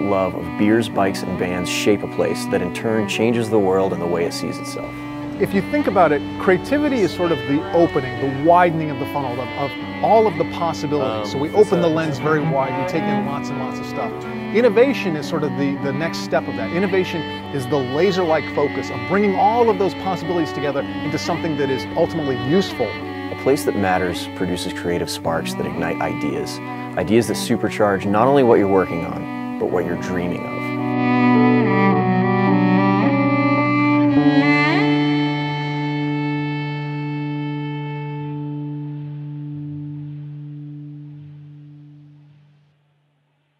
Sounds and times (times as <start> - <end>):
Distortion: 0.0 - 43.5.